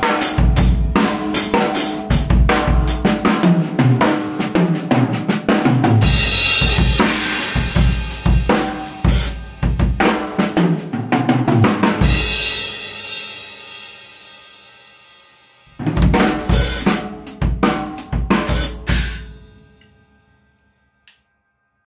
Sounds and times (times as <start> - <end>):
Music: 0.0 - 21.9.